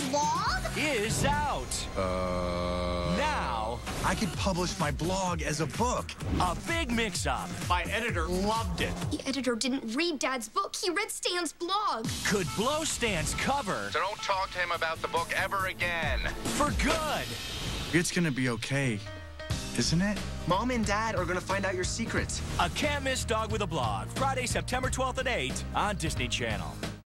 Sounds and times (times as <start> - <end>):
Music: 0.0 - 9.4, 11.9 - 27.0
Speech: 0.7 - 17.3, 18.0 - 19.1, 19.8 - 26.8.